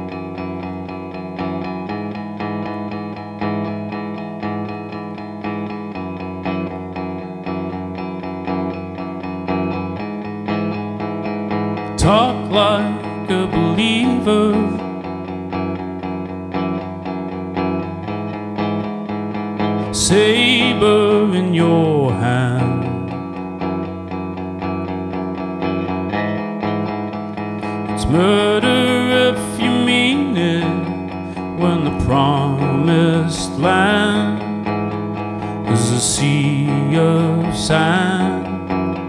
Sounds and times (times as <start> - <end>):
Effects unit: 0.0 - 39.0
Music: 0.0 - 39.0.